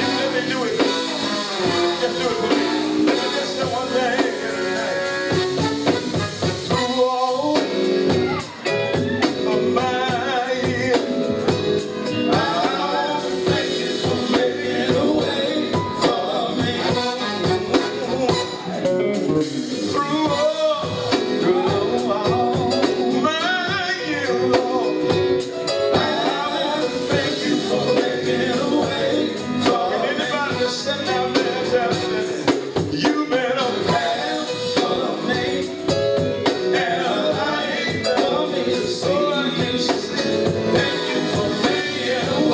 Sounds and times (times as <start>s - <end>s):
Male singing: 0.0s - 5.4s, 6.7s - 8.4s, 9.2s - 11.4s, 12.2s - 25.2s, 25.9s - 36.0s, 36.7s - 42.5s
Music: 0.0s - 42.5s.